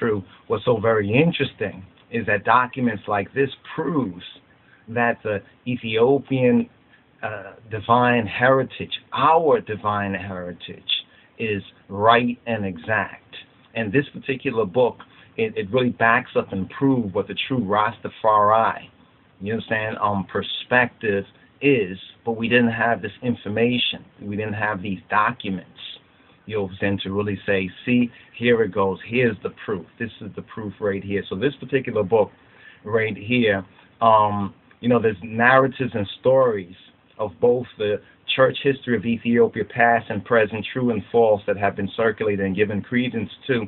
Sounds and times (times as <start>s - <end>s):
Speech: 0.0s - 43.6s.